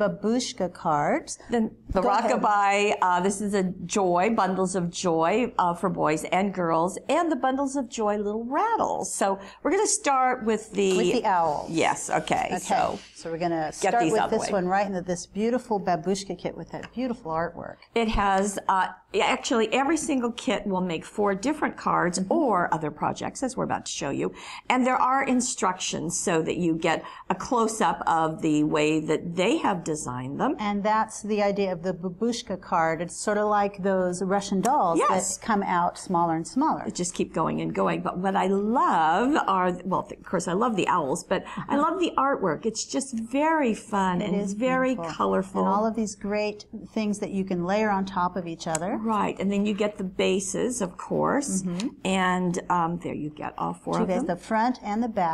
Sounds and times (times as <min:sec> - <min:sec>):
Speech: 0:00.0 - 0:55.3.